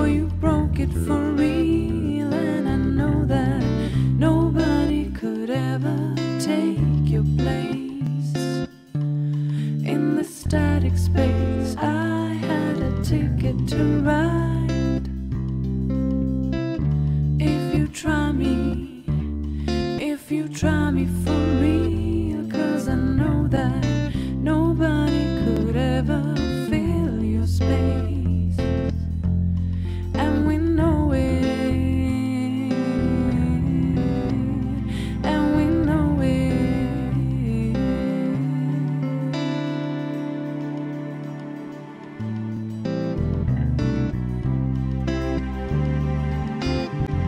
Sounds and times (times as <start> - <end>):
Music: 0.0 - 47.2.